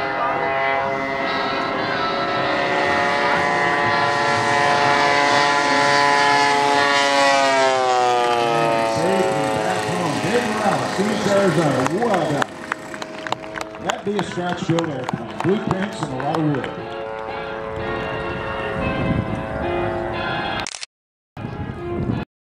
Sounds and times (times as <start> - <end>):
Speech: 8.9 - 12.5, 13.8 - 16.7
Music: 16.3 - 20.6, 21.4 - 22.2.